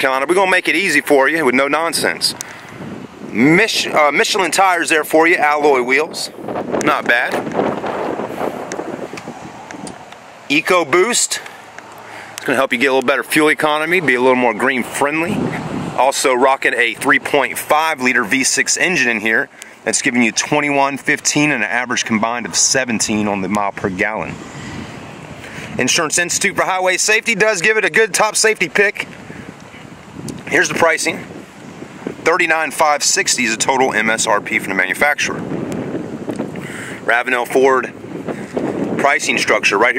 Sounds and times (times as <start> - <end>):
Speech: 0.0 - 2.4, 3.3 - 7.4, 10.5 - 11.5, 12.4 - 24.4, 25.8 - 29.1, 30.4 - 31.3, 32.2 - 35.4, 37.1 - 38.0, 39.0 - 39.9.